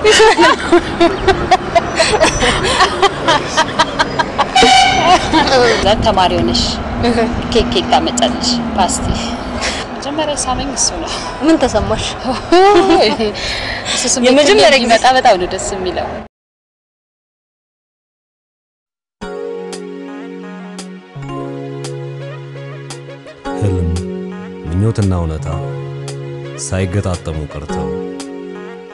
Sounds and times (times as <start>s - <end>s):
Tender music: 19.2s - 28.9s
Speech: 23.6s - 24.0s, 24.7s - 25.6s, 26.6s - 28.0s.